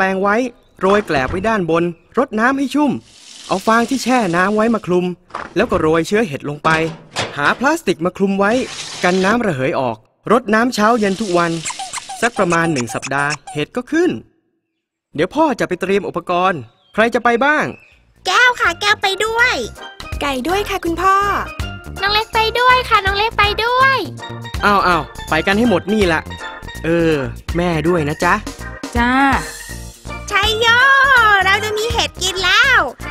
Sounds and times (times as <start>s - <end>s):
Child speech, kid speaking: 18.2s - 24.2s, 30.3s - 33.1s
Music for children: 18.3s - 33.1s.